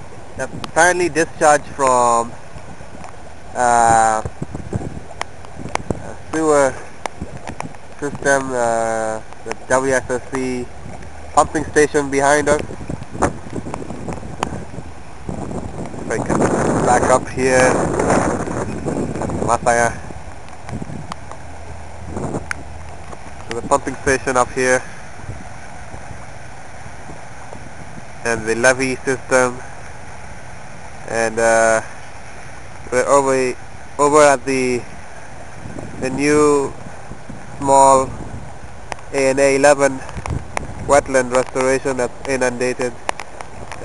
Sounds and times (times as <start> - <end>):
Speech: 0.4 - 2.3, 3.6 - 4.3, 6.0 - 6.8, 8.0 - 10.7, 11.4 - 12.6, 16.1 - 17.8, 19.5 - 20.0, 23.5 - 24.9, 28.2 - 29.6, 31.1 - 31.9, 32.9 - 34.9, 36.0 - 36.8, 37.6 - 38.1, 39.1 - 40.1, 40.9 - 43.0.